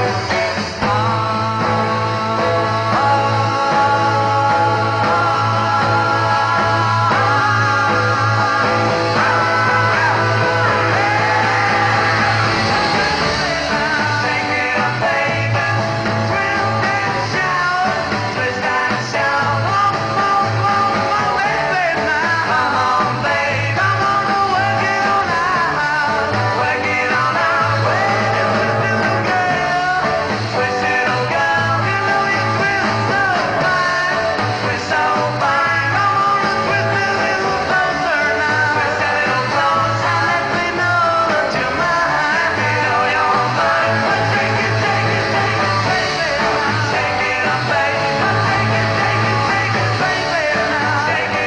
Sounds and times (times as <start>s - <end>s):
Rock and roll: 0.0s - 51.4s
Singing: 0.0s - 51.4s.